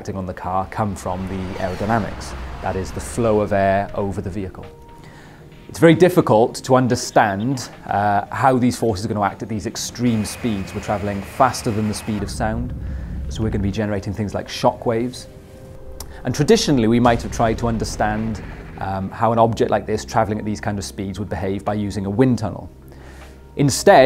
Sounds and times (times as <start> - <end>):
Speech: 0.0 - 4.7, 5.7 - 12.7, 13.3 - 15.3, 16.2 - 22.7, 23.6 - 24.0.